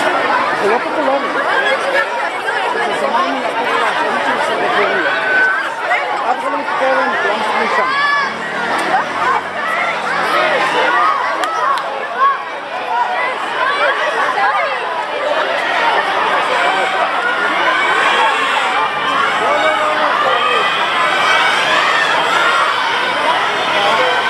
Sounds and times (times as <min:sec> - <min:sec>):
Speech: 0:00.0 - 0:21.5
Outside, urban or manmade: 0:00.0 - 0:24.2.